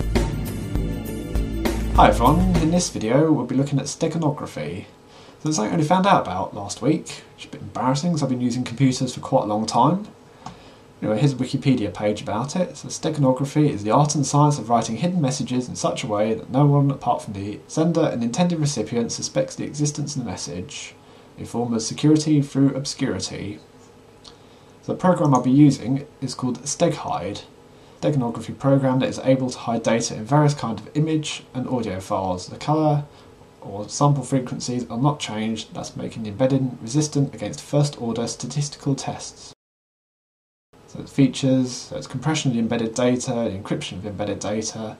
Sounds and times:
Speech: 2.0s - 10.2s, 11.0s - 23.7s, 24.8s - 39.6s, 40.9s - 44.9s.

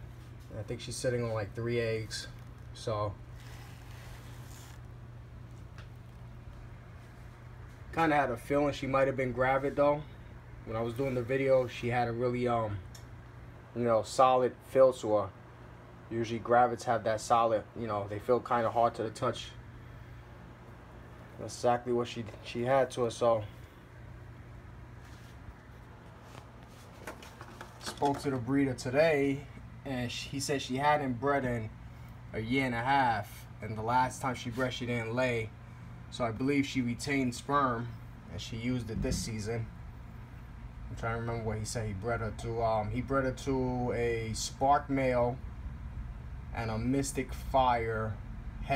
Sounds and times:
Inside, small room: 0.0s - 48.7s
Speech: 0.5s - 3.2s, 7.9s - 12.9s, 13.7s - 15.4s, 16.1s - 19.6s, 21.4s - 23.6s, 27.9s - 31.7s, 32.3s - 35.5s, 36.1s - 39.7s, 40.9s - 45.4s, 46.5s - 48.7s.

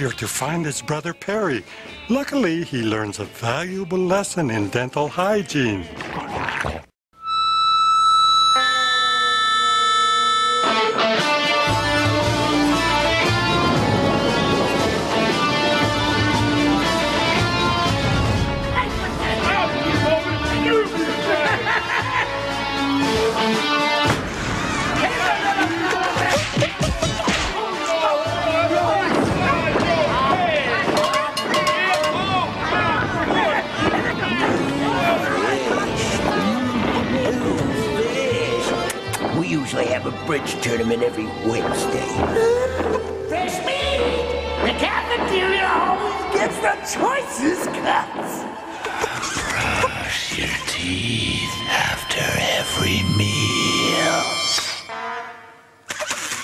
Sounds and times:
Electric guitar: 10.0s - 25.3s.

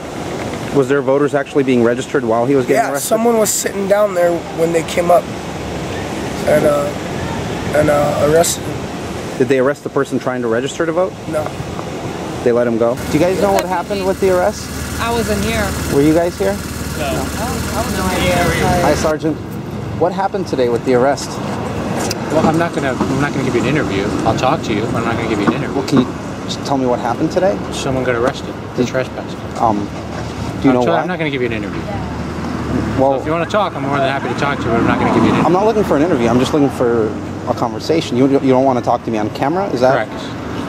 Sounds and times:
Outside, urban or manmade: 0.0s - 40.6s.

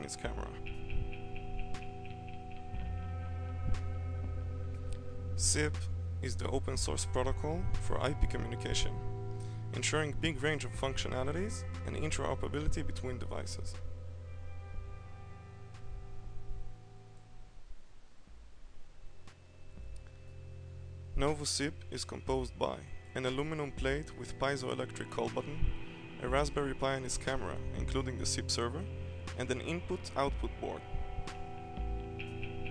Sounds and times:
Speech: 0.0s - 0.6s, 5.4s - 9.0s, 9.8s - 13.8s, 21.2s - 25.6s, 26.2s - 30.8s
Music: 0.0s - 32.7s.

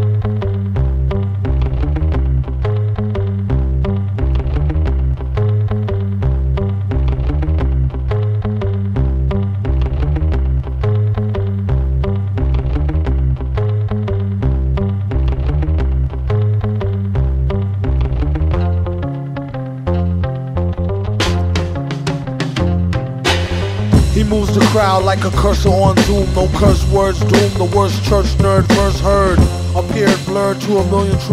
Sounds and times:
Music: 0.0s - 31.3s.

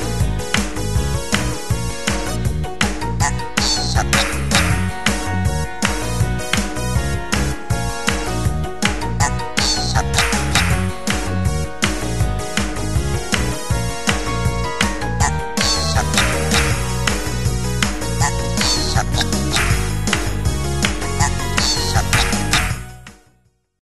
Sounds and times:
Music: 0.0s - 23.8s.

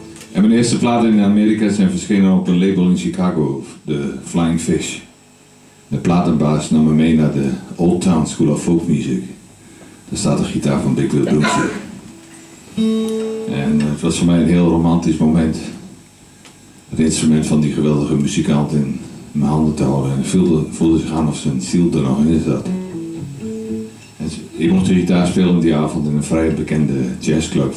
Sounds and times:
Electric guitar: 0.0s - 0.4s, 11.2s - 14.0s, 22.6s - 24.6s
Speech: 0.4s - 5.2s, 5.9s - 9.5s, 10.1s - 12.0s, 13.5s - 16.0s, 16.9s - 22.7s, 24.2s - 27.7s.

